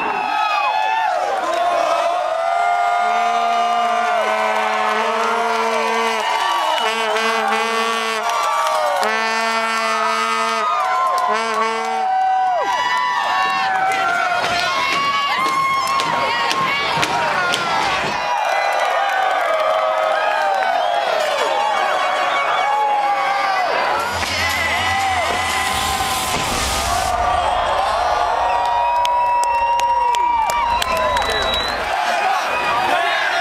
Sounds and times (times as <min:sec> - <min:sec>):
Cheering: 0:00.0 - 0:33.4
Crowd: 0:00.0 - 0:33.4.